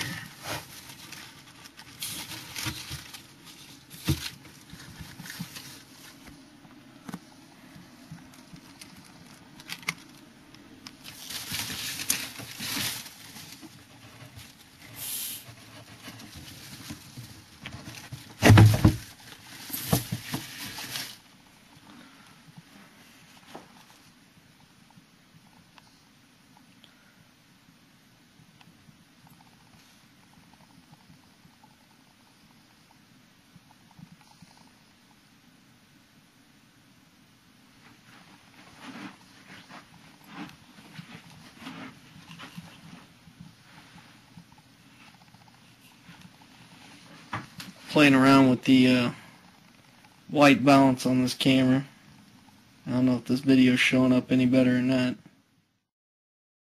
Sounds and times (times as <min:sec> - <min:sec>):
Inside, small room: 0:00.0 - 0:55.9.